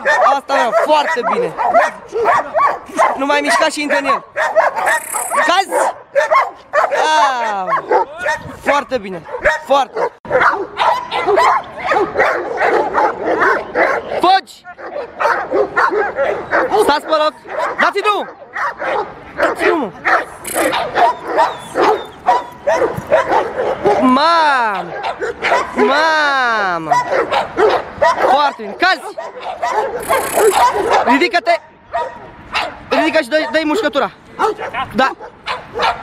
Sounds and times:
Bow-wow: 0.0 - 24.1, 24.7 - 26.0, 26.8 - 31.3, 31.9 - 33.8, 34.4 - 36.0
Speech: 0.1 - 1.6, 32.9 - 34.2.

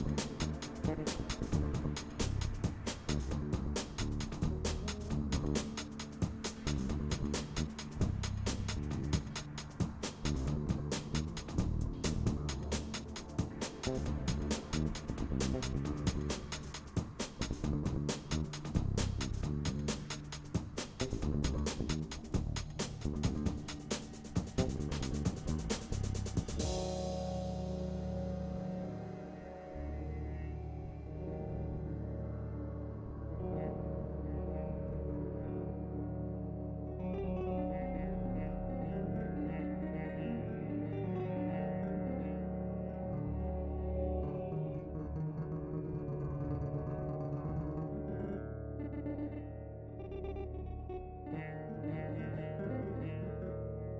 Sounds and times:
Music: 0.0 - 53.9.

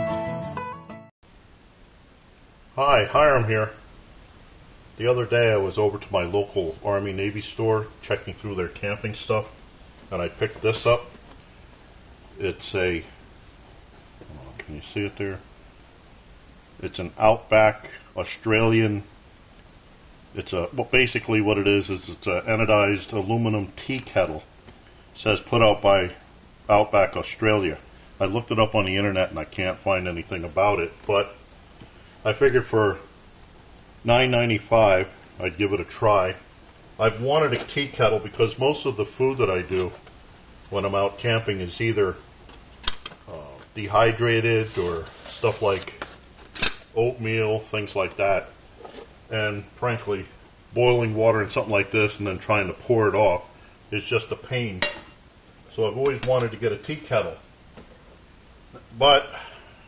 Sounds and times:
Speech: 2.8 - 3.9, 5.0 - 11.1, 12.4 - 13.2, 14.3 - 15.5, 16.8 - 19.1, 20.4 - 24.5, 25.2 - 31.4, 32.2 - 33.1, 34.0 - 40.0, 40.7 - 42.3, 43.3 - 46.0, 47.0 - 48.6, 49.3 - 55.0, 55.7 - 57.5, 58.8 - 59.5.

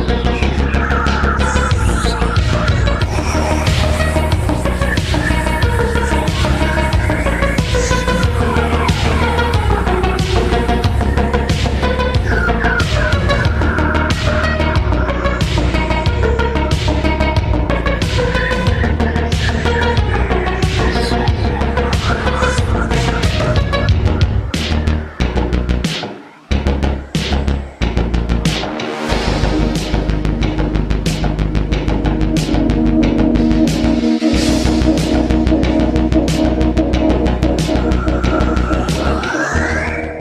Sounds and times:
Music: 0.0 - 40.2.

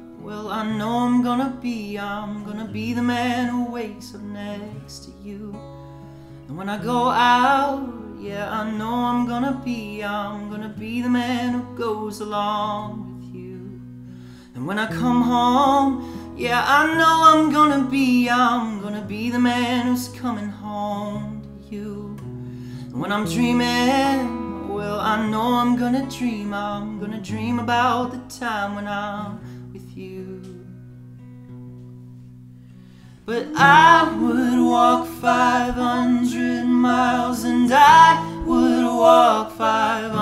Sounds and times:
Music: 0.0 - 40.2.

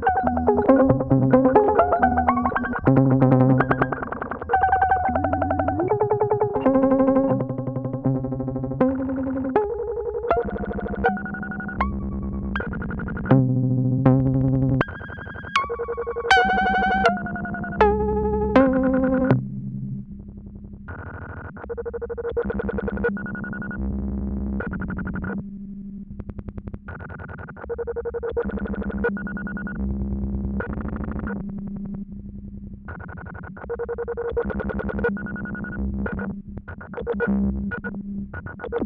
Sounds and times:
Synthesizer: 0.0 - 20.4.

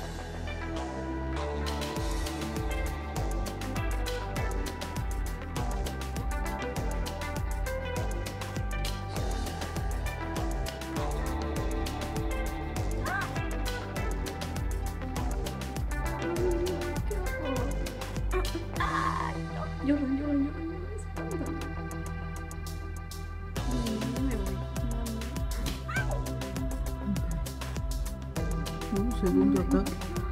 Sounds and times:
Music: 0.0 - 30.3.

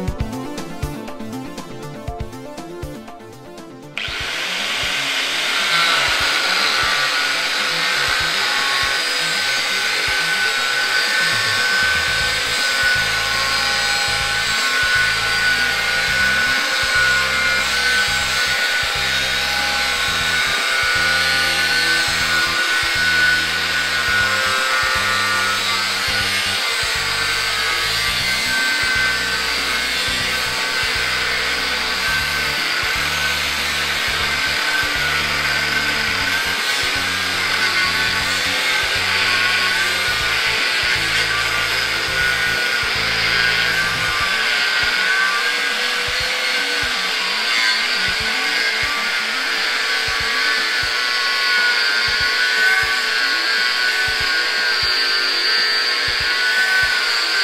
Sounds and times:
Music: 0.0 - 57.4
Drill: 4.0 - 57.4.

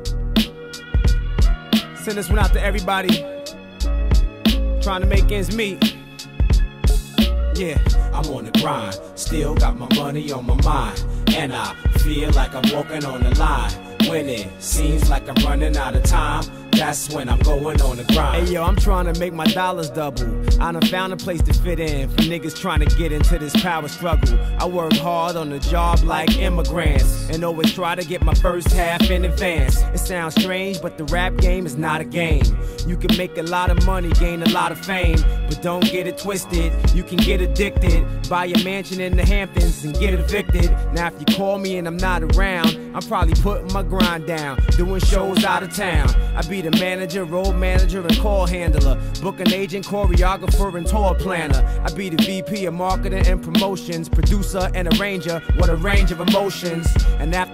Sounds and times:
Hip hop music: 0.0 - 57.5.

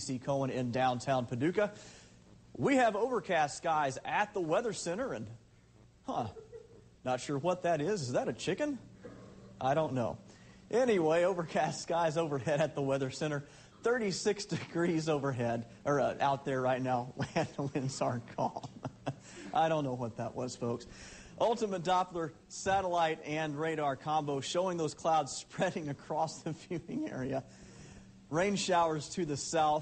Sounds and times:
Speech: 0.0 - 1.8, 2.6 - 5.4, 7.0 - 8.9, 9.6 - 18.7, 19.6 - 27.5, 28.3 - 29.8.

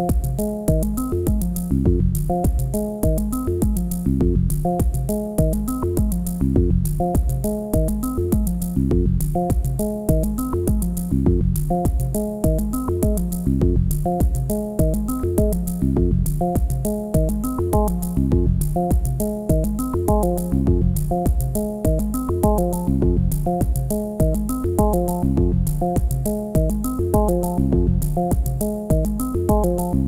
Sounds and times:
Music: 0.0 - 30.0.

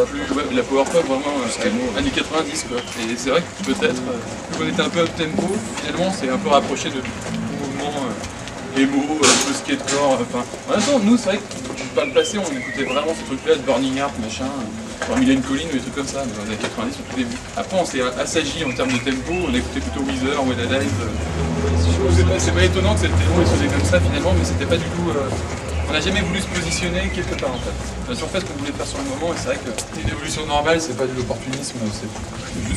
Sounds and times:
Speech: 0.0 - 32.7.

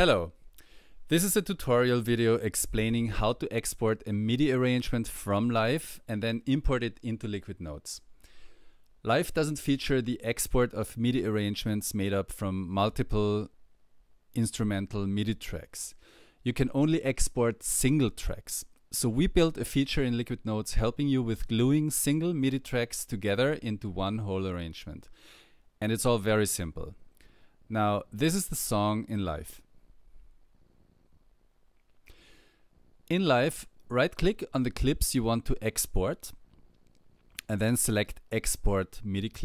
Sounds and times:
Speech: 0.0 - 0.4, 1.1 - 8.1, 9.0 - 13.6, 14.3 - 25.1, 25.8 - 27.0, 27.7 - 29.7, 33.1 - 36.4, 37.4 - 39.4.

